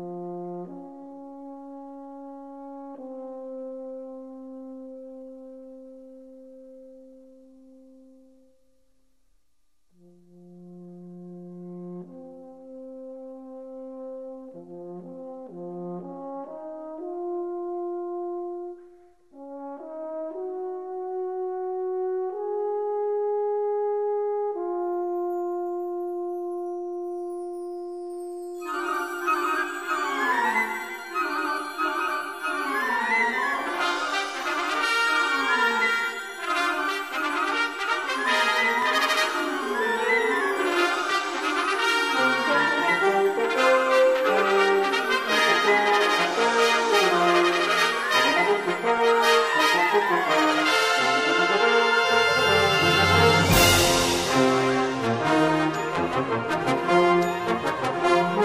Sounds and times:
Music: 0.0 - 58.4.

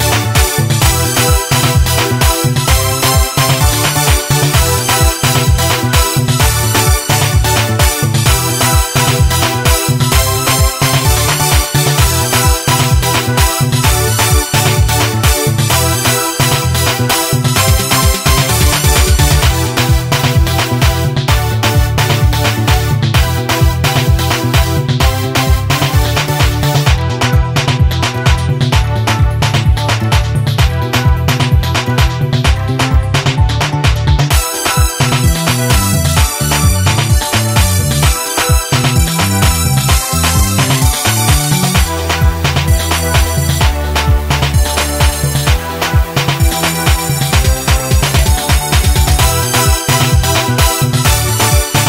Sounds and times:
Afrobeat: 0.0 - 51.8.

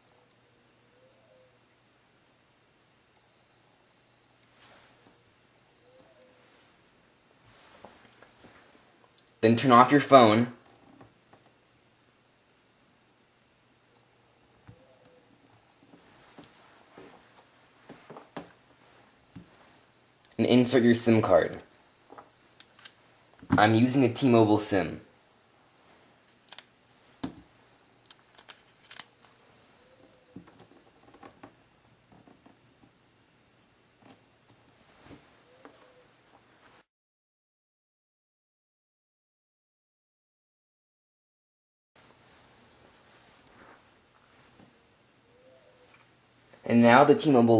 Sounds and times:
Silence: 0.0 - 9.4, 11.1 - 23.4, 29.0 - 30.4, 42.0 - 46.7
Inside, small room: 0.0 - 36.9, 42.0 - 47.5.

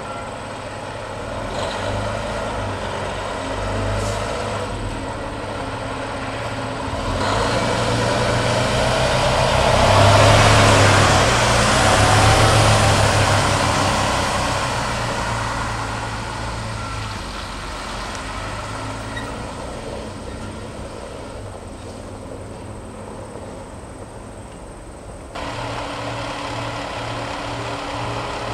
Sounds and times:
Heavy engine (low frequency): 0.0 - 28.5
Truck: 0.0 - 28.5
Accelerating, revving, vroom: 1.3 - 5.0, 6.8 - 19.7.

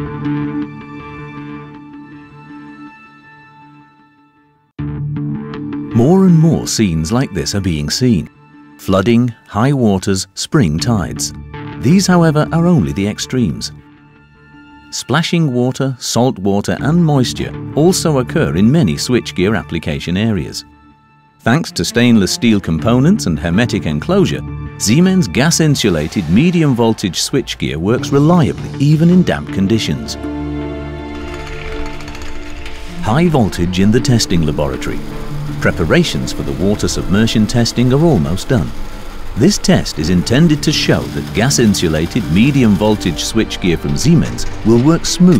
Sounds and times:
Music: 0.0 - 45.3
Speech: 5.9 - 13.8, 14.9 - 20.7, 21.4 - 30.2, 33.0 - 35.0, 35.6 - 38.7, 39.4 - 45.3.

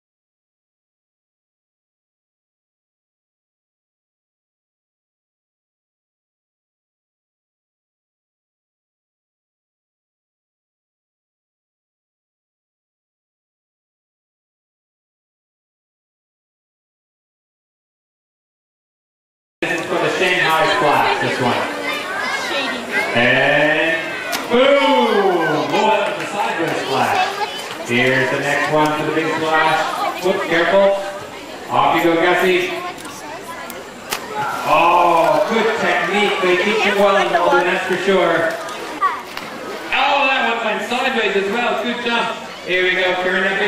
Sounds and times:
Speech: 19.6 - 39.2, 39.8 - 43.6
Water: 19.6 - 43.6.

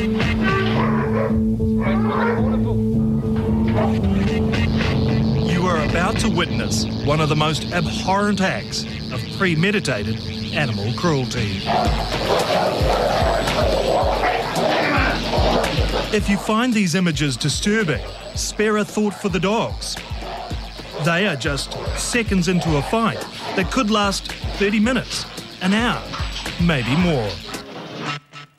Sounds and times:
Music: 0.0 - 28.5
Speech: 5.5 - 11.7, 16.1 - 20.0, 21.0 - 27.4.

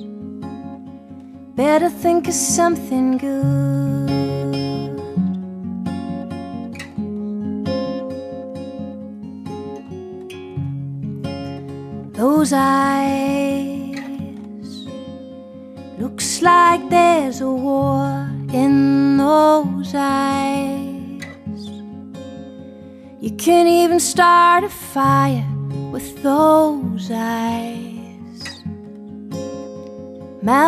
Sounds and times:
Music: 0.0 - 30.6.

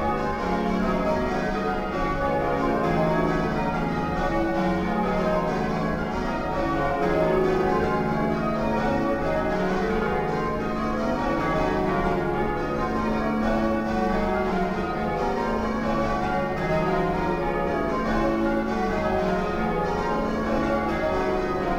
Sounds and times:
Change ringing (campanology): 0.0 - 21.7.

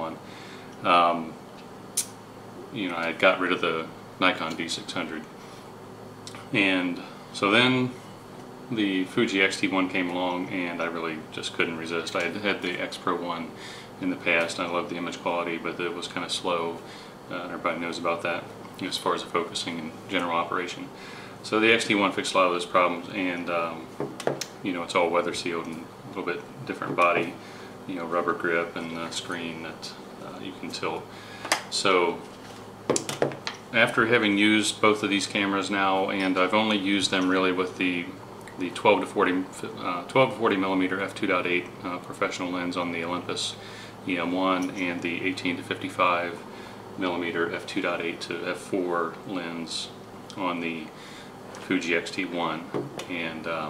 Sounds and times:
Speech: 0.0 - 0.2, 0.8 - 1.4, 2.7 - 5.3, 6.3 - 8.0, 8.7 - 24.0, 24.6 - 31.1, 31.7 - 32.3, 33.7 - 51.0, 51.6 - 53.7
Inside, small room: 0.0 - 53.7.

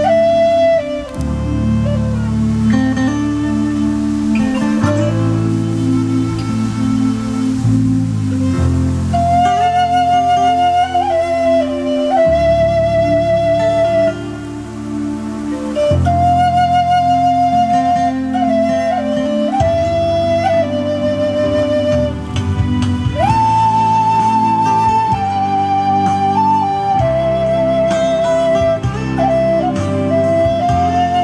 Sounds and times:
Flute: 0.0 - 31.2.

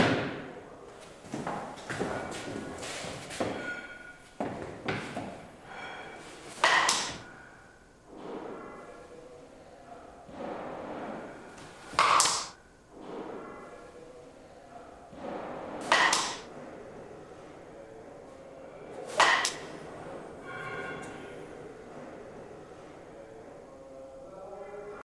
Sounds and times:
Speech: 24.0 - 25.0.

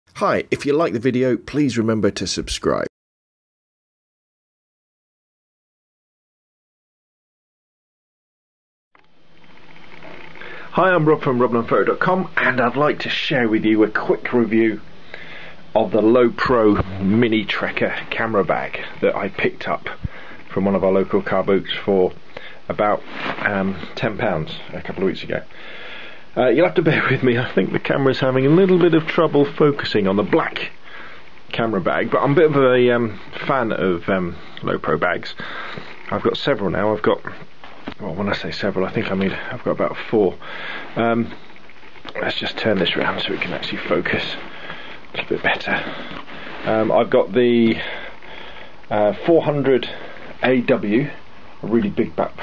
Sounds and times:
Speech synthesizer: 0.2 - 2.9.

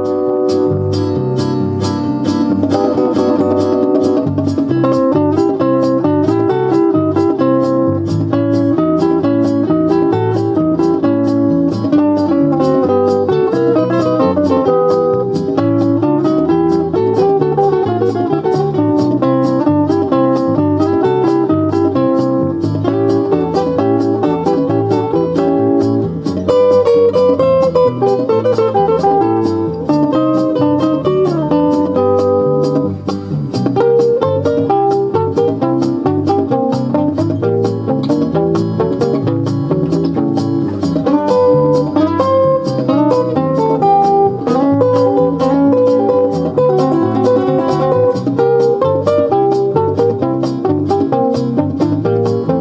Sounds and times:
Guitar: 0.0 - 52.6
Inside, small room: 0.0 - 52.6.

